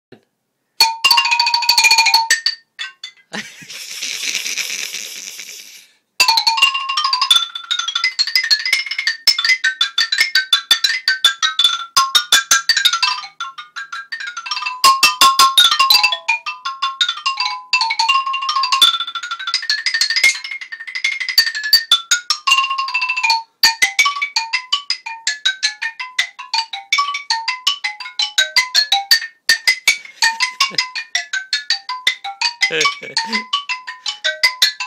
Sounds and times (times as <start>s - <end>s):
Marimba, xylophone: 0.8s - 4.5s, 6.2s - 34.8s.